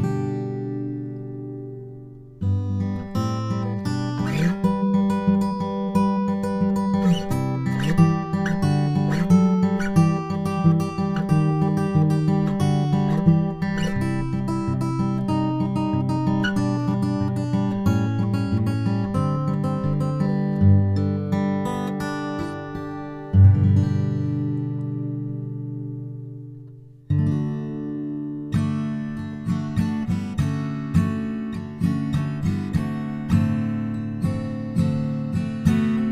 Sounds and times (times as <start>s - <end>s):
Music: 0.0s - 36.1s.